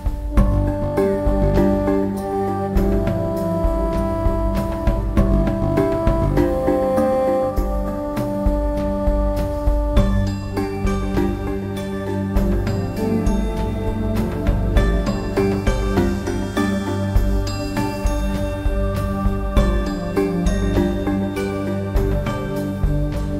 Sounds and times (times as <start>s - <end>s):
Music: 0.0s - 23.3s.